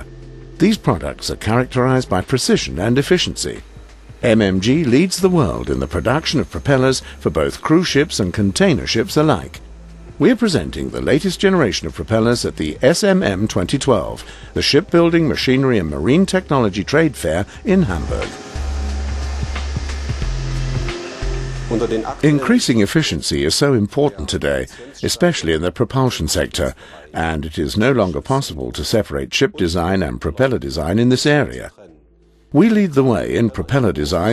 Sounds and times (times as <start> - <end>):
Music: 0.0 - 34.3
Speech: 0.6 - 3.6, 4.2 - 9.6, 10.2 - 18.4, 21.7 - 32.0, 32.6 - 34.3.